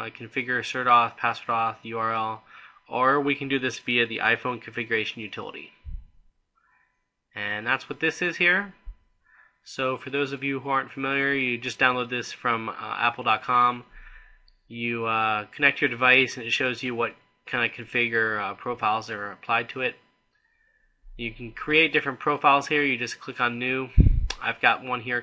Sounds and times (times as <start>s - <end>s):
Speech: 0.0s - 6.0s, 7.4s - 8.9s, 9.7s - 20.1s, 21.2s - 25.2s.